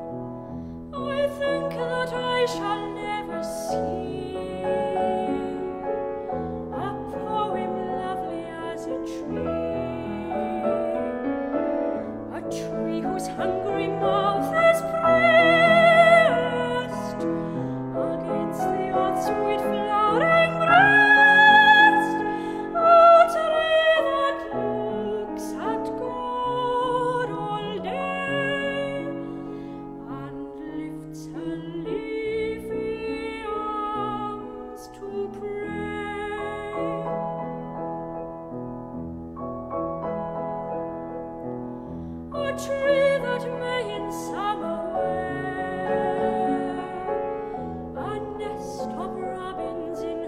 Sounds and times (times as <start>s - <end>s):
Music: 0.0s - 50.2s
Female singing: 1.0s - 5.8s, 6.8s - 11.2s, 12.3s - 17.3s, 17.9s - 29.4s, 30.0s - 37.2s, 42.4s - 47.3s, 47.9s - 50.2s.